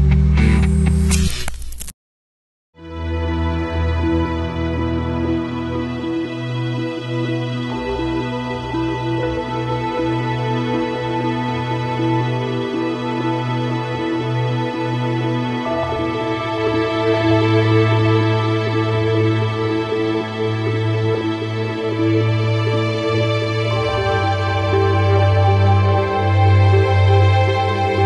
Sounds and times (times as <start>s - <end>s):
Background music: 2.8s - 28.0s.